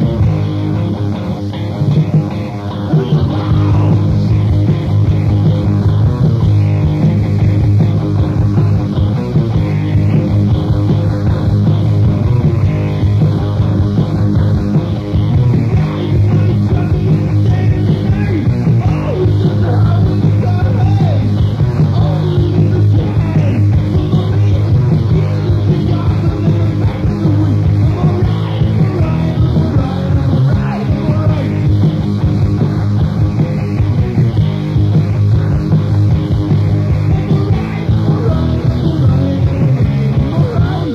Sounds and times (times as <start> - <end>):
Music: 0.0 - 40.9.